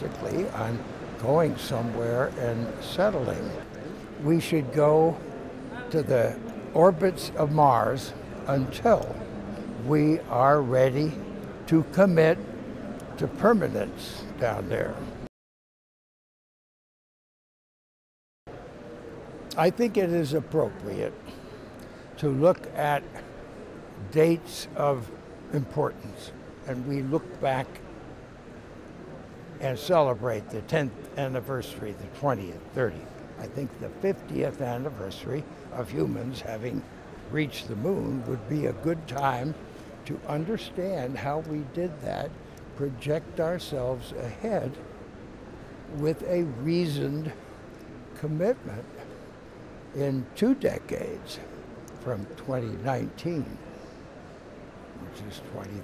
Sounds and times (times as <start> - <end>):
Speech: 0.0 - 12.5, 13.1 - 15.3, 19.5 - 21.4, 22.2 - 23.3, 24.0 - 27.8, 29.6 - 44.8, 45.9 - 47.4, 48.2 - 49.1, 49.9 - 53.6, 55.0 - 55.8.